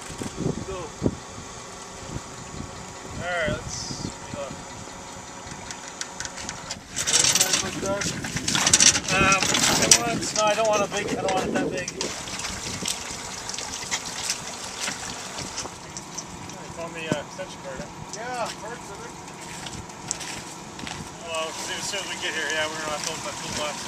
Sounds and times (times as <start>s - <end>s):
Speech: 3.2s - 4.6s, 7.1s - 8.2s, 9.0s - 12.1s, 16.6s - 19.1s, 21.2s - 23.8s.